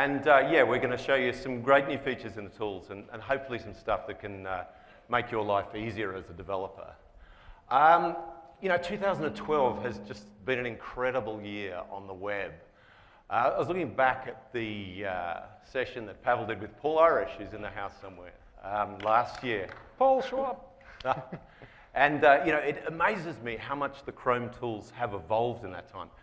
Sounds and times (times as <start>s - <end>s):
Speech: 0.0s - 7.0s, 7.7s - 12.6s, 13.3s - 21.3s, 22.0s - 26.2s.